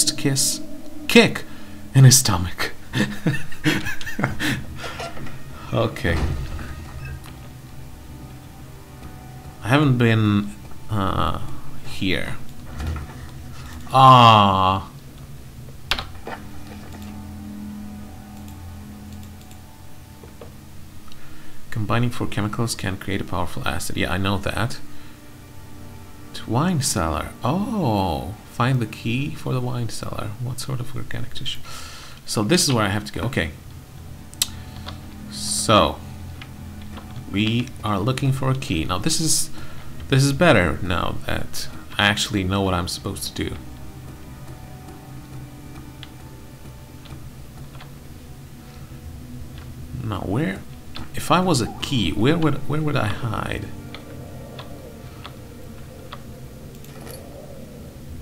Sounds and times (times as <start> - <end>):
Speech: 0.0 - 1.4, 2.0 - 2.8, 5.7 - 6.4, 21.7 - 24.8, 26.4 - 31.6, 32.3 - 33.6, 37.3 - 39.5, 40.1 - 43.6, 50.0 - 53.7
Music: 0.0 - 58.2.